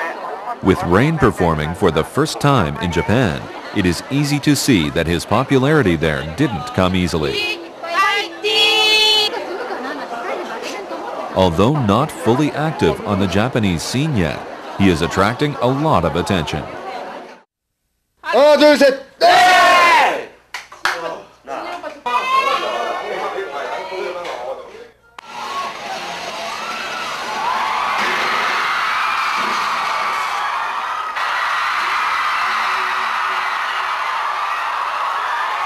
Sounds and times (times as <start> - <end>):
Speech: 0.6 - 7.6, 11.4 - 16.8.